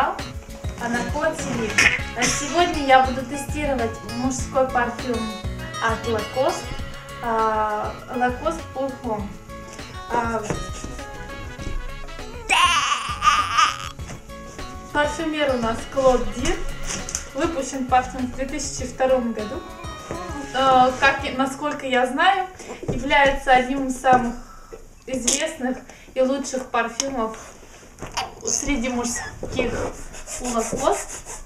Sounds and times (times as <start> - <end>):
Speech: 0.8 - 6.6, 7.2 - 9.3, 10.1 - 10.6, 25.1 - 27.4, 28.5 - 31.1.